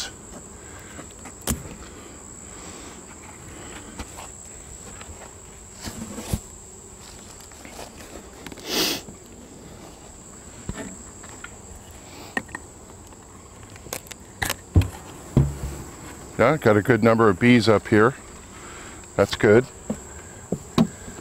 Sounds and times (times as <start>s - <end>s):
Bee, wasp, etc.: 0.0s - 21.2s
Speech: 16.4s - 18.2s, 19.2s - 19.7s.